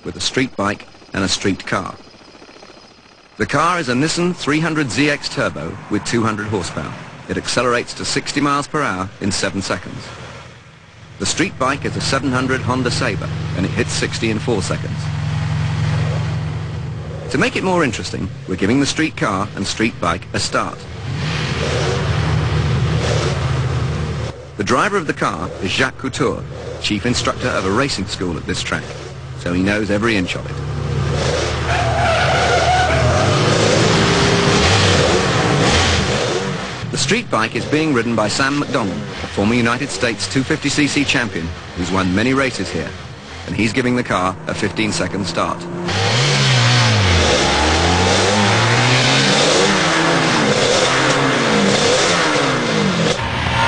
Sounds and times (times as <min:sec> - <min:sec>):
Speech: 0:00.0 - 0:02.0, 0:03.4 - 0:10.1, 0:11.2 - 0:15.1, 0:17.3 - 0:20.9, 0:24.6 - 0:30.6, 0:36.9 - 0:45.7
Vehicle: 0:00.0 - 0:53.6.